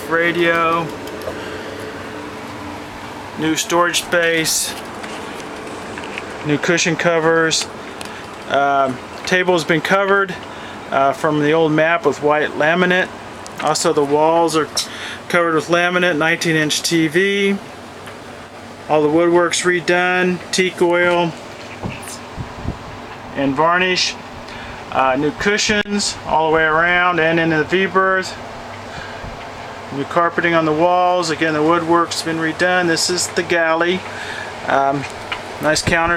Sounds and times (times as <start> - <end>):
Speech: 0.0 - 0.9, 3.4 - 4.8, 6.4 - 7.7, 8.5 - 17.7, 18.9 - 22.2, 23.4 - 24.2, 24.9 - 28.4, 29.9 - 36.1.